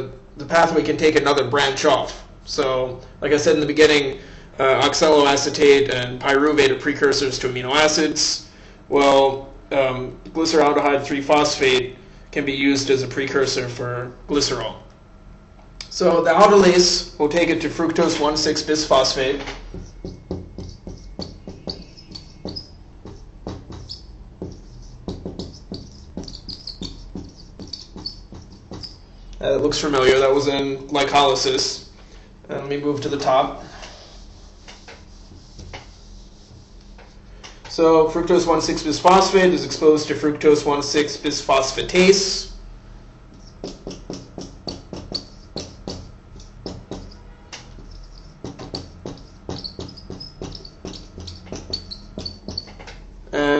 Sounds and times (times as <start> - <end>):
Speech: 0.0 - 14.9, 15.8 - 19.5, 29.4 - 31.9, 32.5 - 33.7, 37.7 - 42.6, 53.3 - 53.5
Inside, small room: 0.0 - 53.5.